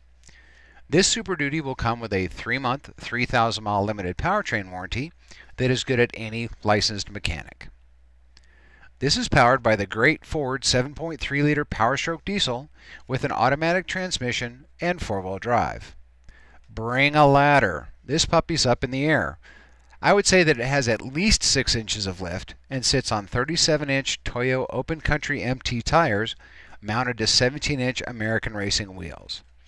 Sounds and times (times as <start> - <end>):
Speech: 0.9 - 7.8, 9.0 - 16.0, 16.7 - 19.4, 20.0 - 29.5.